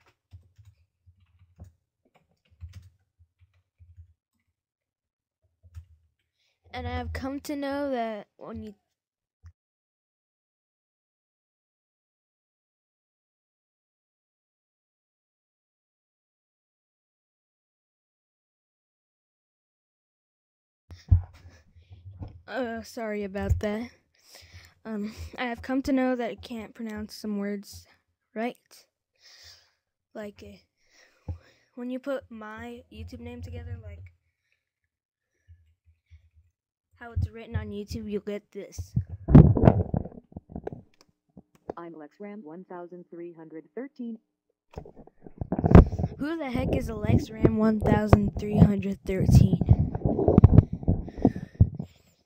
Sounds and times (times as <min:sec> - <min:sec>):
Speech: 0:06.8 - 0:08.8, 0:22.5 - 0:23.9, 0:24.9 - 0:28.8, 0:30.2 - 0:30.6, 0:31.8 - 0:34.1, 0:37.0 - 0:39.0, 0:41.8 - 0:44.2, 0:46.1 - 0:49.8.